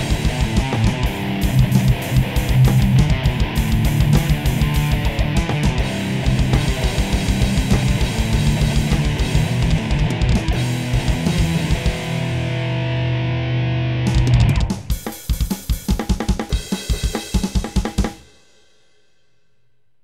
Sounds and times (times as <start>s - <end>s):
Bass drum: 0.0s - 12.4s, 14.1s - 16.4s
Drum kit: 0.0s - 12.9s, 14.0s - 19.0s.